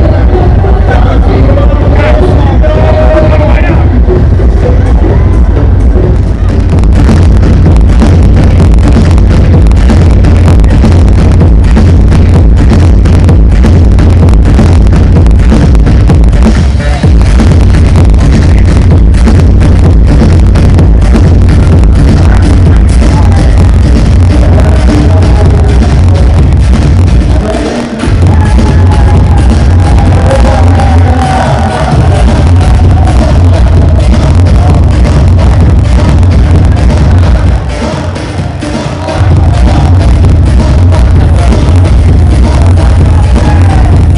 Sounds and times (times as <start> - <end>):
Disco: 0.0 - 44.1.